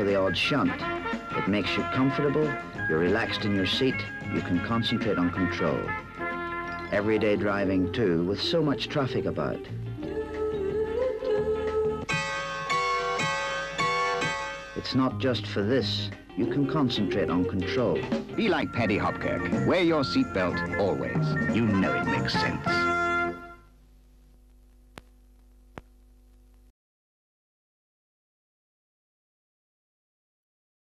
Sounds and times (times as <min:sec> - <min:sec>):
Speech: 0:00.0 - 0:05.9, 0:06.9 - 0:09.7, 0:14.8 - 0:22.9
Music: 0:00.0 - 0:23.8.